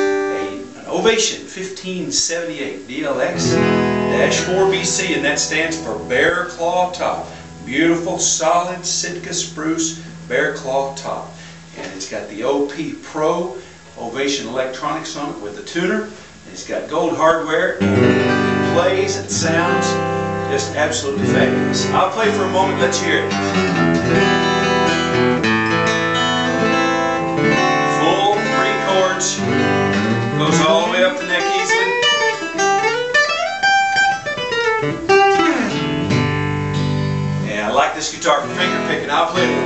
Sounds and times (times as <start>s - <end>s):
Electric guitar: 0.0s - 0.9s, 3.4s - 8.3s, 17.8s - 37.5s, 38.5s - 39.6s
Strum: 0.0s - 1.3s, 2.9s - 14.0s, 17.8s - 39.6s
Acoustic guitar: 0.0s - 39.6s.